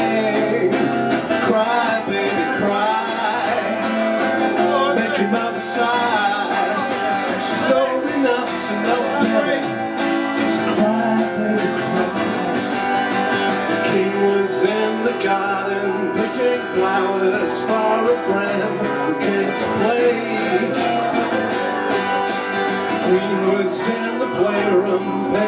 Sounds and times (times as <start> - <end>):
Music: 0.0 - 25.4
Speech: 4.6 - 9.8.